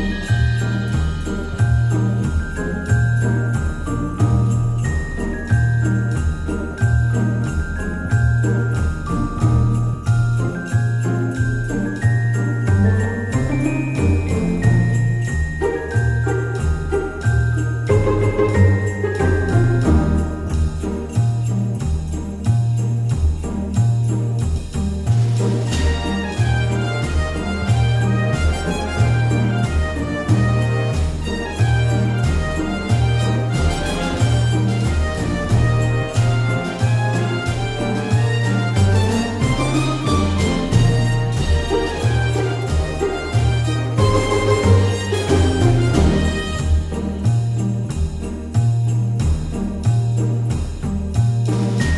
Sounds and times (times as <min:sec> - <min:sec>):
Music: 0:00.0 - 0:51.9.